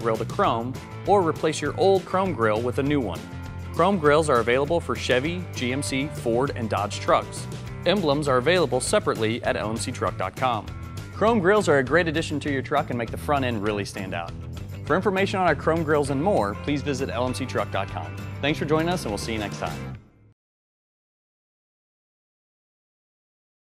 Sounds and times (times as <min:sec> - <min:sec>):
Speech: 0:00.0 - 0:03.2, 0:03.8 - 0:14.3, 0:14.9 - 0:19.9
Music: 0:00.0 - 0:20.4.